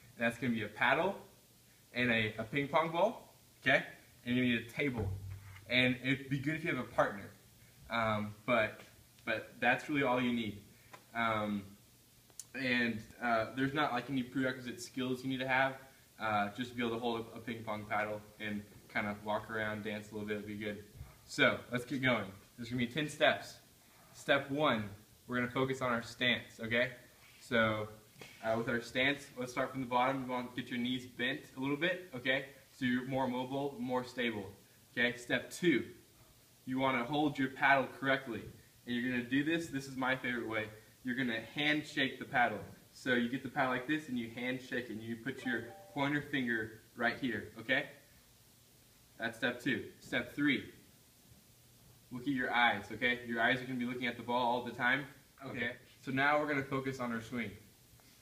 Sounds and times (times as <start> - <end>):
Speech: 0.2 - 1.3, 1.9 - 11.8, 12.4 - 36.0, 36.6 - 48.0, 49.2 - 50.8, 52.1 - 57.7.